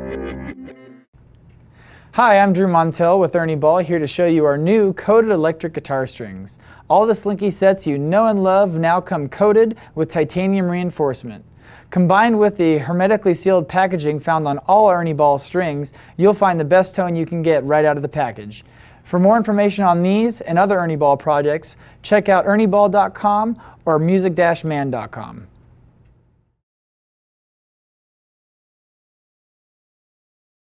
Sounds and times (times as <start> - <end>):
Speech: 2.2 - 25.5.